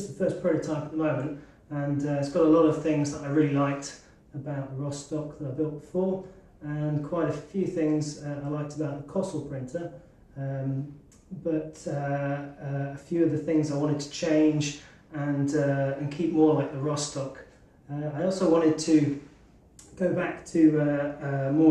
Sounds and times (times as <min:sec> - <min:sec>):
Speech: 0:00.0 - 0:19.2, 0:19.8 - 0:21.7.